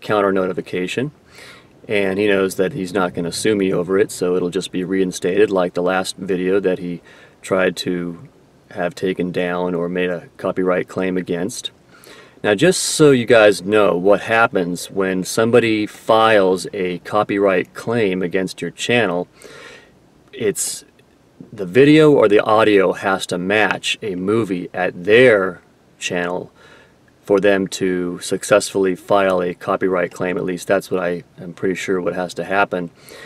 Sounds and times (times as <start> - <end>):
Male speech, man speaking: 0.0 - 1.2, 1.9 - 11.7, 12.4 - 19.3, 20.4 - 20.9, 21.5 - 26.5, 27.3 - 32.9
Narration, monologue: 0.0 - 33.2.